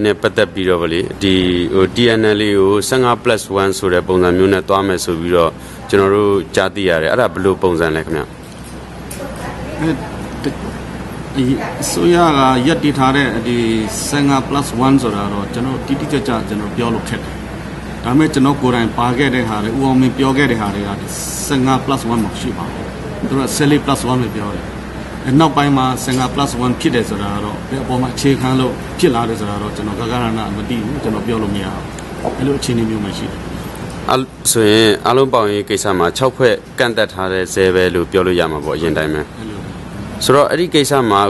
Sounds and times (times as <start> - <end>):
Male speech, man speaking: 0.0 - 8.3, 9.7 - 10.7, 11.3 - 17.4, 18.0 - 33.4, 34.1 - 41.2
Conversation: 0.0 - 41.2.